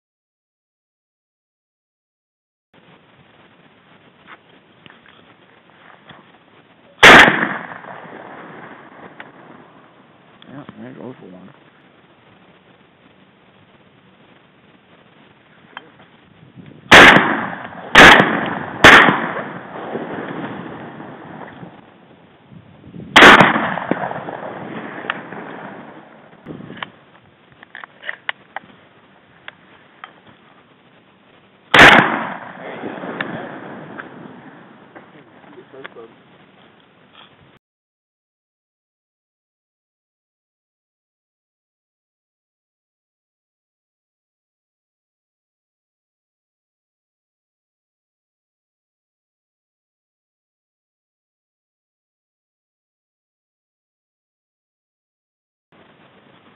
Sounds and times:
Speech: 0:10.4 - 0:11.6, 0:35.1 - 0:36.2.

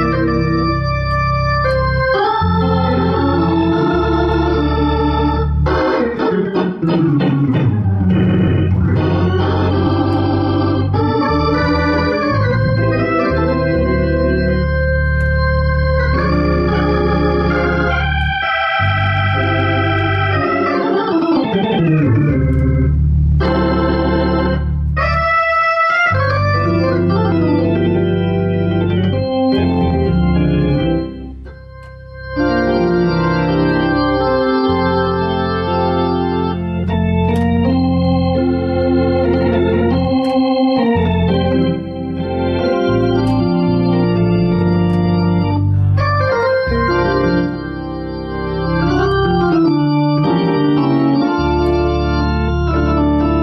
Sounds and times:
Electronic organ: 0:00.0 - 0:53.4.

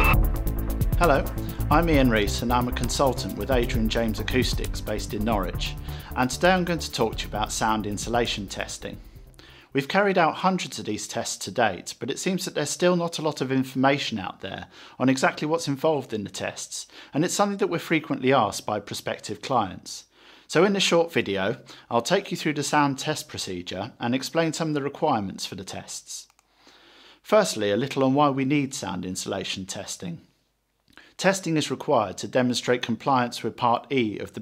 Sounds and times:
Speech: 0:01.0 - 0:09.0, 0:09.7 - 0:26.4, 0:27.2 - 0:30.3, 0:31.2 - 0:34.4.

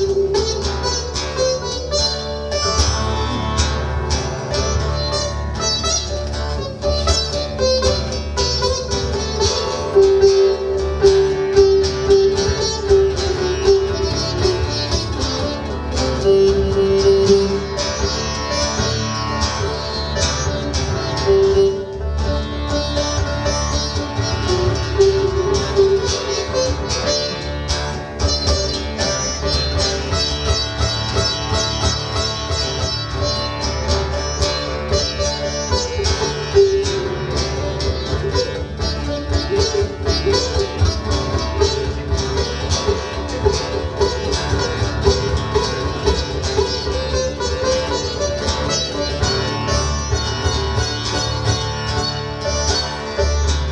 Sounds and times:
Bowed string instrument: 0:00.0 - 0:53.7
Sitar: 0:00.0 - 0:53.7.

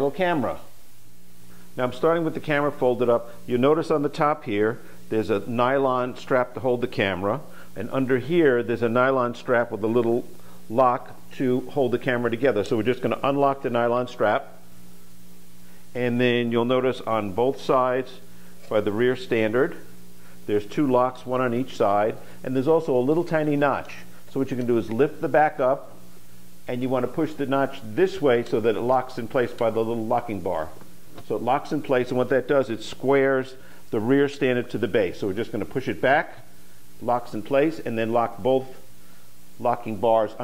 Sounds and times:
Speech: 0:00.0 - 0:00.7, 0:01.8 - 0:14.6, 0:16.0 - 0:19.9, 0:20.5 - 0:26.0, 0:26.7 - 0:38.9, 0:39.6 - 0:40.4.

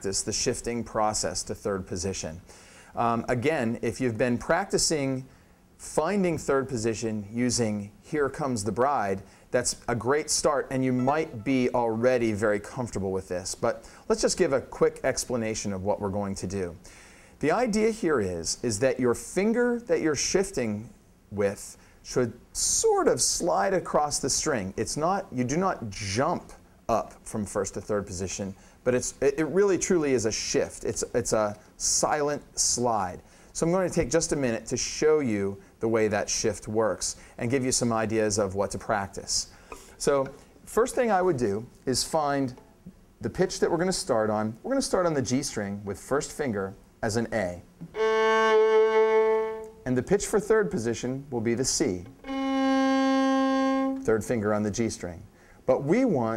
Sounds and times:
Speech: 0:00.0 - 0:42.6, 0:43.2 - 0:47.7, 0:49.8 - 0:52.2, 0:54.0 - 0:56.3.

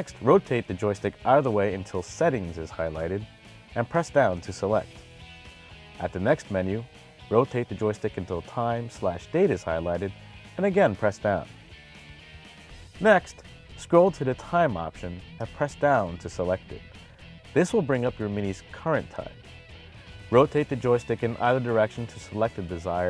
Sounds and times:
Speech: 0:00.0 - 0:03.2, 0:03.8 - 0:04.9, 0:06.0 - 0:11.5, 0:13.0 - 0:16.8, 0:17.6 - 0:19.4, 0:20.3 - 0:23.0
Music: 0:00.0 - 0:23.0.

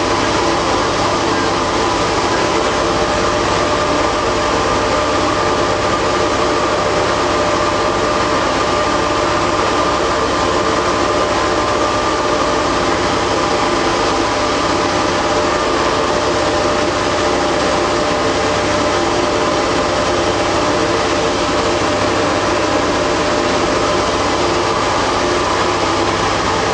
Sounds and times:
Heavy engine (low frequency): 0:00.0 - 0:26.7.

